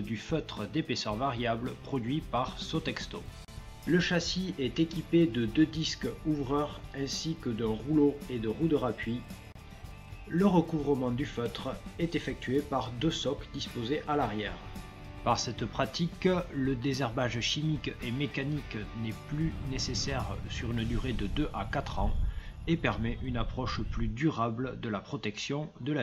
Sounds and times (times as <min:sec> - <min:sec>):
Speech: 0:00.0 - 0:03.3, 0:03.9 - 0:09.3, 0:10.3 - 0:14.6, 0:15.2 - 0:26.0
Music: 0:00.0 - 0:24.4.